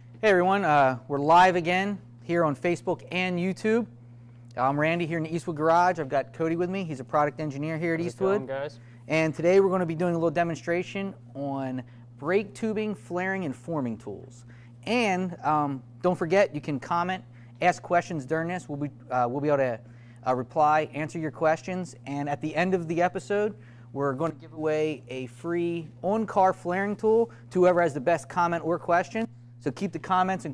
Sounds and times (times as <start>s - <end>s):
Speech: 4.6s - 30.5s.